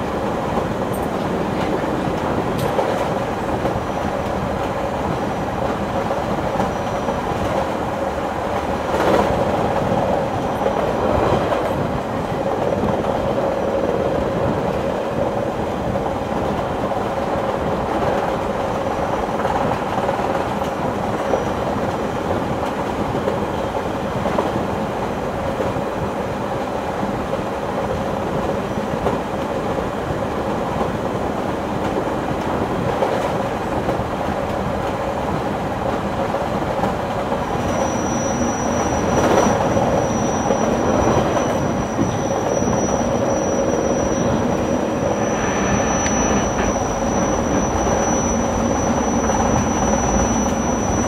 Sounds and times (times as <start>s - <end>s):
Outside, rural or natural: 0.0s - 51.0s
Train: 0.0s - 51.0s.